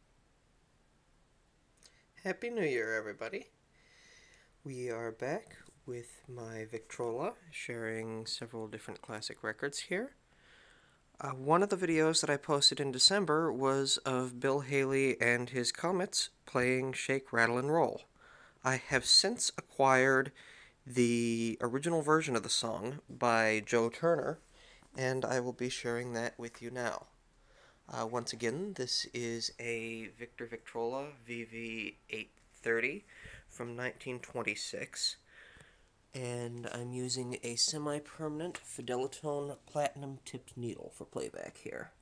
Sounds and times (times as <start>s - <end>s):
Speech: 2.2s - 3.5s, 4.6s - 10.2s, 11.2s - 27.2s, 27.9s - 35.3s, 36.2s - 42.0s.